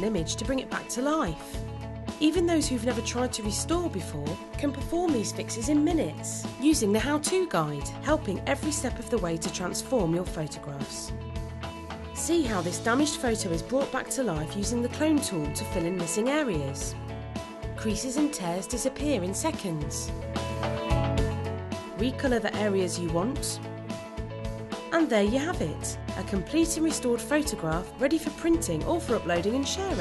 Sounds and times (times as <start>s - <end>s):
Speech: 0.0s - 1.6s, 2.2s - 11.1s, 12.2s - 17.0s, 17.8s - 20.1s, 22.0s - 23.6s, 24.9s - 30.0s
Music: 0.0s - 30.0s.